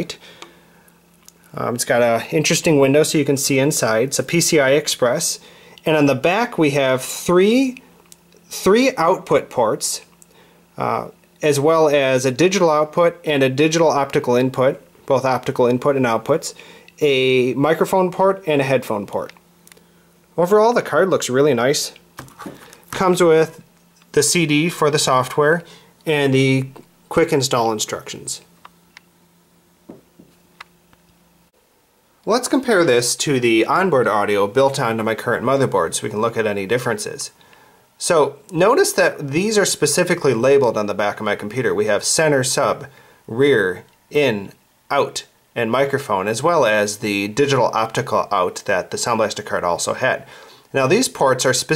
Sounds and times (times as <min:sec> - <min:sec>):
Speech: 0:00.0 - 0:00.2, 0:01.5 - 0:10.2, 0:10.8 - 0:19.4, 0:20.4 - 0:22.0, 0:22.9 - 0:28.5, 0:32.3 - 0:37.4, 0:38.0 - 0:51.7.